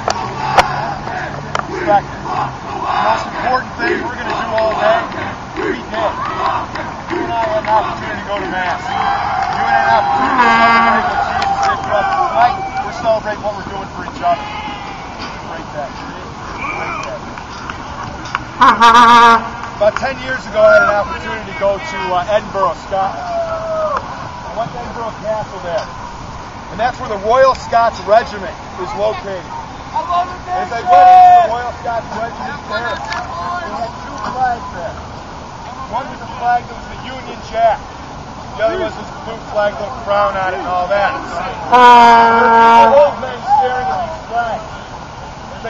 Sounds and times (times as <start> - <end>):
Male speech, man speaking: 3.1 - 5.1, 7.2 - 9.0, 9.6 - 14.6, 15.4 - 17.2, 19.8 - 23.5, 24.5 - 25.9, 26.7 - 35.0, 35.7 - 37.8, 38.5 - 44.7.